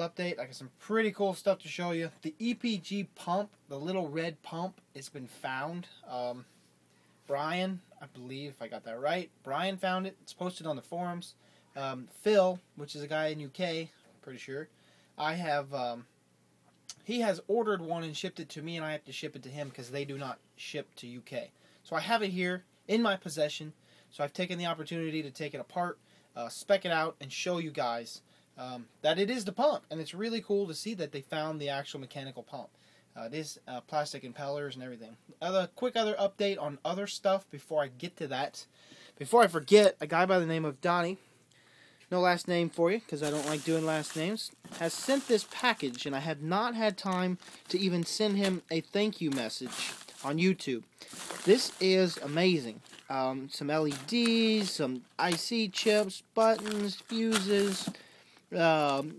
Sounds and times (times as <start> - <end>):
Speech: 0.0 - 6.5, 7.2 - 16.1, 16.9 - 41.2, 42.1 - 59.1.